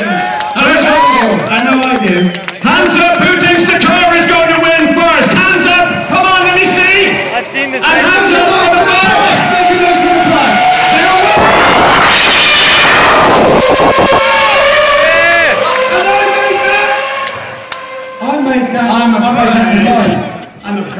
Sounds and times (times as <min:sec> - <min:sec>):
Speech: 0:00.0 - 0:11.3, 0:18.2 - 0:20.9
Vehicle: 0:00.0 - 0:20.9.